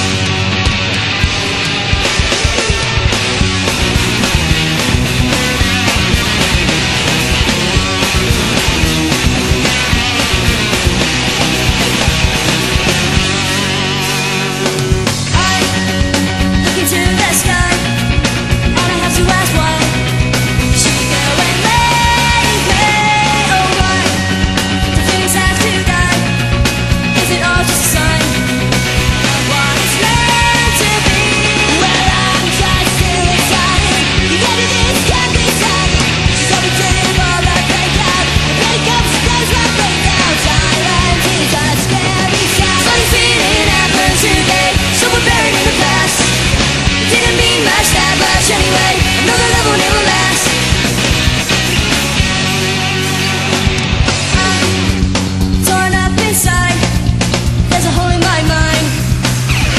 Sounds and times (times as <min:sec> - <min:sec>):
Music: 0:00.0 - 0:59.7.